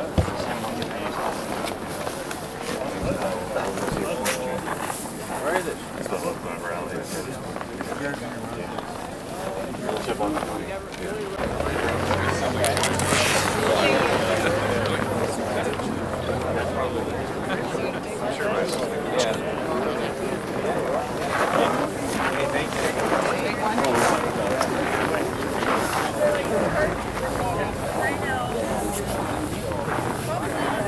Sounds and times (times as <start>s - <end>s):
Speech: 0.0s - 30.8s.